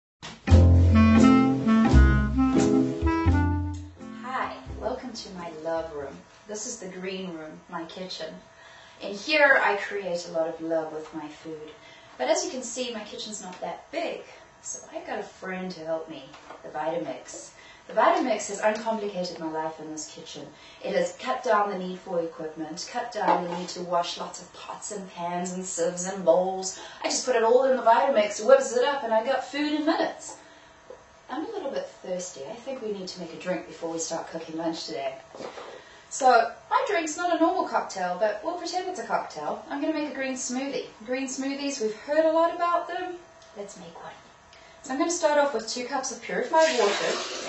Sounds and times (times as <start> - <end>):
Music: 0.2 - 5.2
Speech: 4.2 - 8.4, 9.0 - 30.4, 31.3 - 35.2, 36.1 - 47.3.